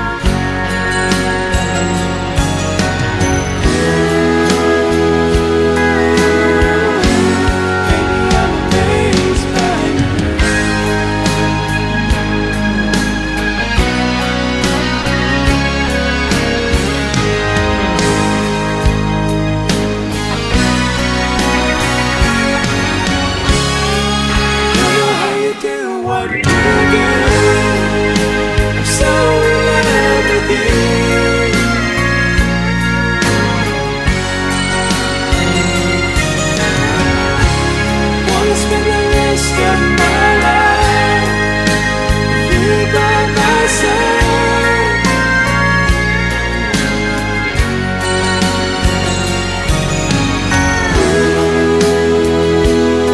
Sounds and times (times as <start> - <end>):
Christian music: 0.0 - 53.1.